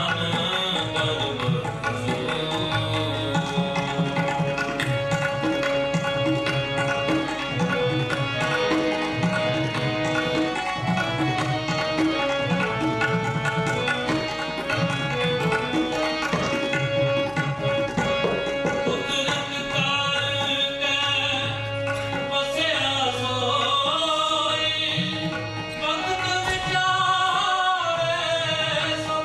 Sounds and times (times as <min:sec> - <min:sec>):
Tabla: 0:00.0 - 0:29.2.